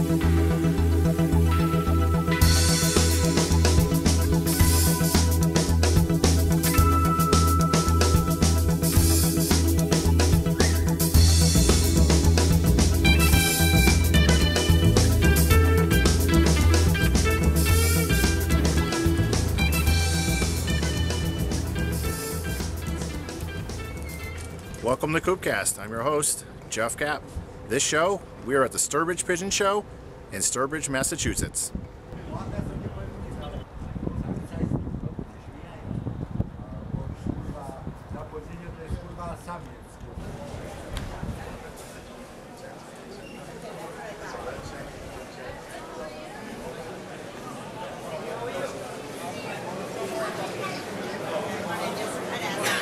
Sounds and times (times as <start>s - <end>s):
Speech: 24.8s - 36.0s, 36.6s - 52.8s.